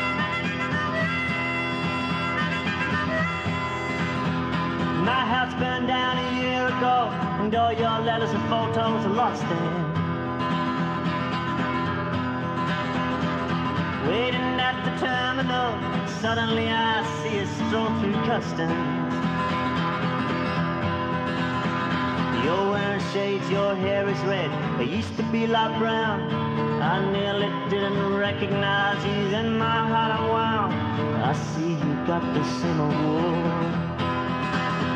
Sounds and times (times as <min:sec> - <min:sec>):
Music: 0:00.0 - 0:34.9.